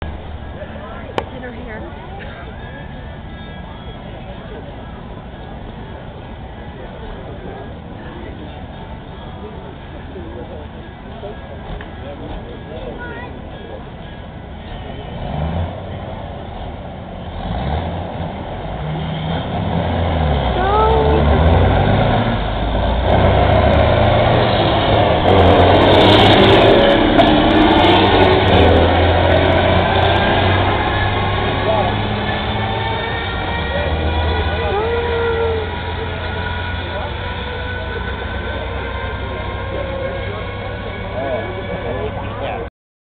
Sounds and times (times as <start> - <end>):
Truck: 0.0 - 42.7
Speech: 33.8 - 42.7.